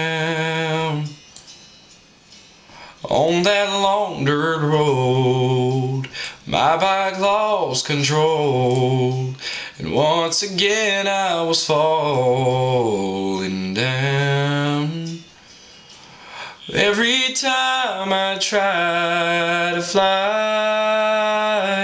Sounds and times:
Music: 0.0 - 7.3, 8.7 - 21.8.

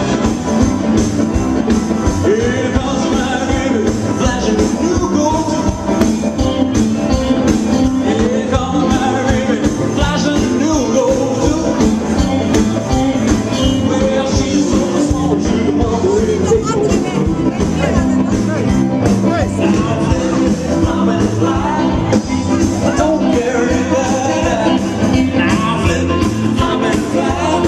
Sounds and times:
Music of Latin America: 0.0 - 27.6.

